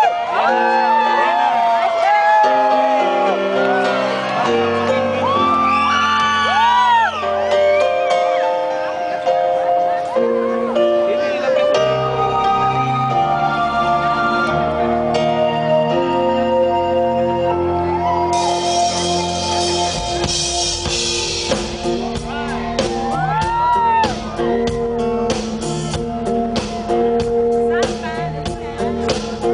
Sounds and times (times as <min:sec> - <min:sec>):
Music: 0:00.0 - 0:29.5.